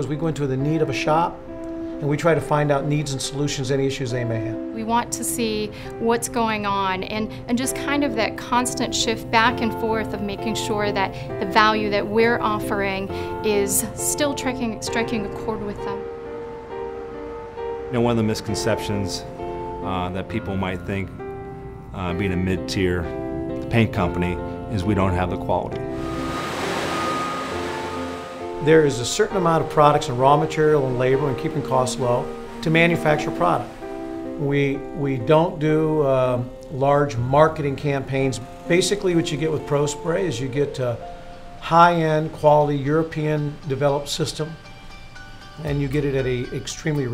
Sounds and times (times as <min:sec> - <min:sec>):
Music: 0:00.0 - 0:47.1.